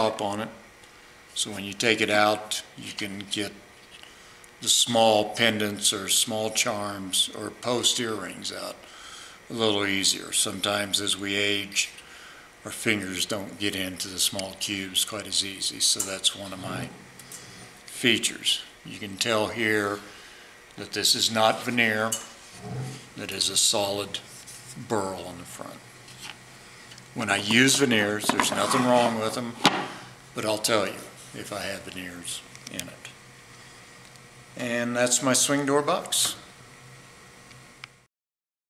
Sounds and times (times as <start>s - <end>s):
Speech: 0.0s - 0.6s, 1.4s - 3.6s, 4.6s - 8.8s, 9.5s - 12.0s, 12.6s - 17.0s, 17.9s - 20.1s, 20.8s - 22.3s, 23.2s - 25.8s, 27.2s - 29.7s, 30.4s - 33.2s, 34.6s - 36.5s.